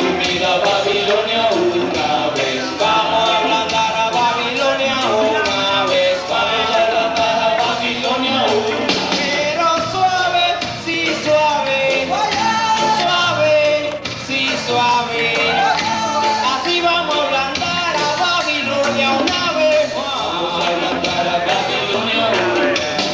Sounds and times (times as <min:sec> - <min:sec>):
Music: 0:00.0 - 0:23.1.